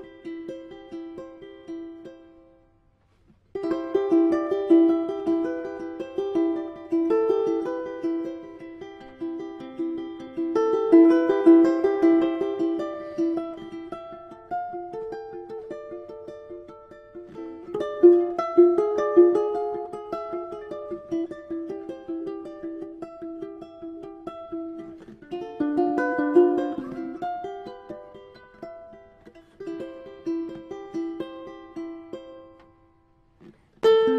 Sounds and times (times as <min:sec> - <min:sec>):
Ukulele: 0:00.0 - 0:34.1.